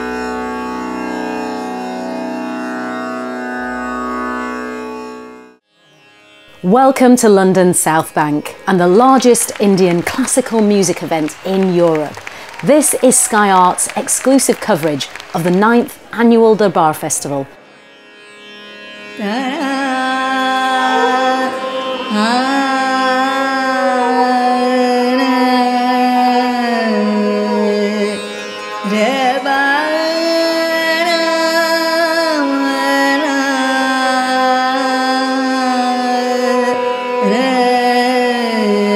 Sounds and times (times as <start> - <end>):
Music: 0.0 - 38.9
Speech: 6.6 - 17.6.